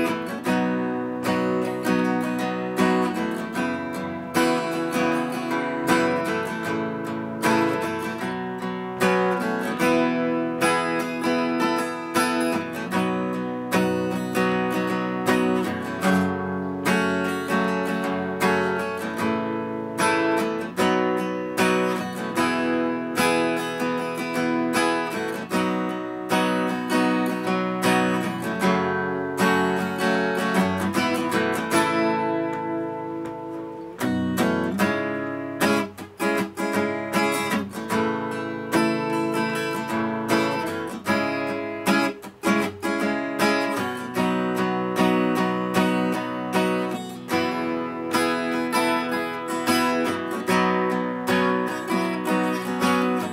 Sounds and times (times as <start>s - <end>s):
Strum: 0.0s - 53.3s.